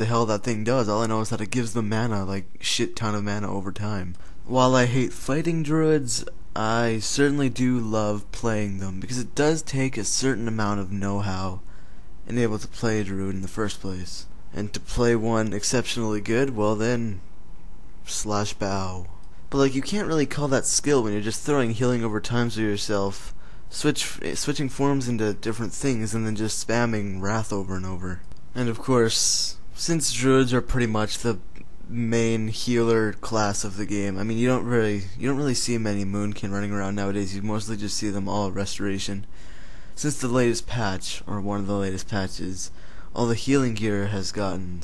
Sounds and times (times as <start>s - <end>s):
Narration, monologue: 0.0s - 44.8s.